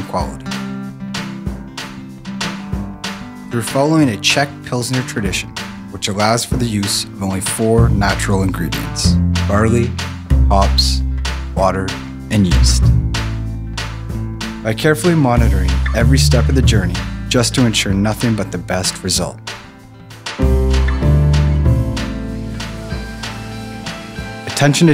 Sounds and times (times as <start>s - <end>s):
Speech: 0.0s - 0.6s, 3.5s - 12.9s, 14.6s - 19.4s, 24.5s - 24.9s
Music: 0.0s - 24.9s.